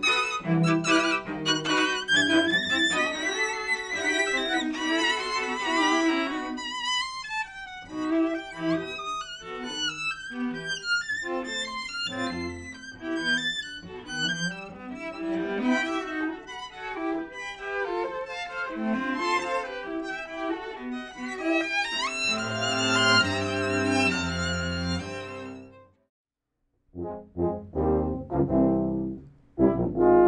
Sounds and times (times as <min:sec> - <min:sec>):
Orchestra: 0:00.0 - 0:25.8, 0:27.0 - 0:30.2.